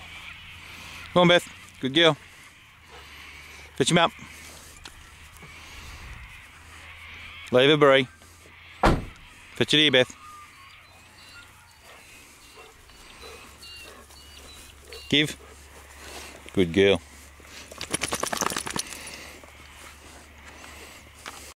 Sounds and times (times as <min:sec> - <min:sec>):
Animal: 0:00.0 - 0:21.5
Speech: 0:16.6 - 0:17.0.